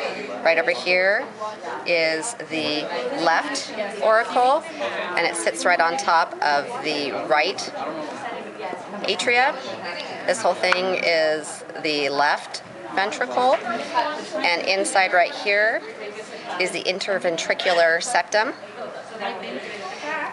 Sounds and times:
Speech: 0:00.0 - 0:20.3.

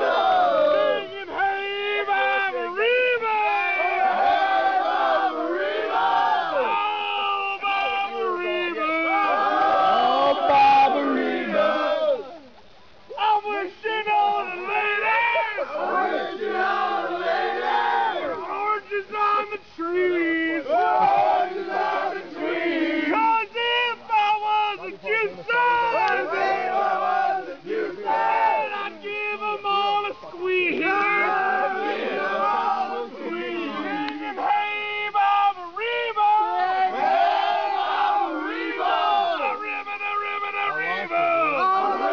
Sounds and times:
Speech: 0:00.0 - 0:12.5, 0:13.1 - 0:42.1.

